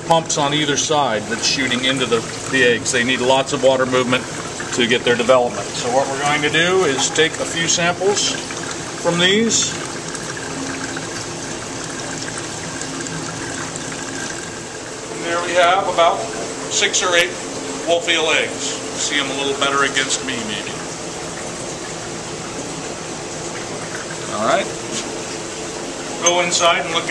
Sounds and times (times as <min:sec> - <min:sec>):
Trickle, dribble: 0:00.0 - 0:27.1.